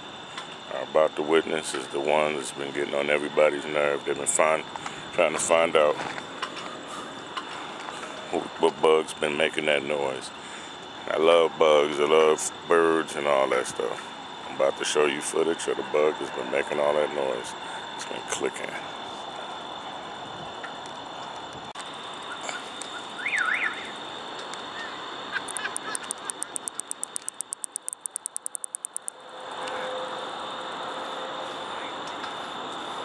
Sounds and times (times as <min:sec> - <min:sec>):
Speech: 0:00.7 - 0:06.1, 0:08.3 - 0:10.3, 0:11.1 - 0:18.9.